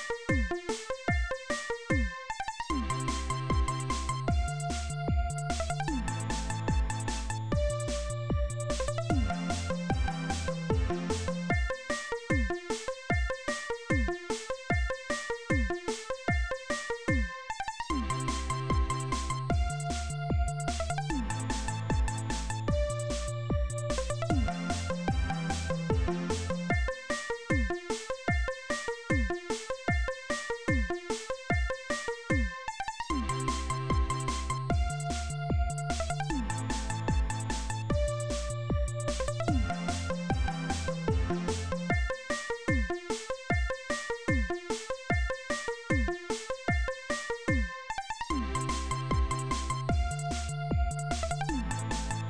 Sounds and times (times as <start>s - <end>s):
Music: 0.0s - 52.2s.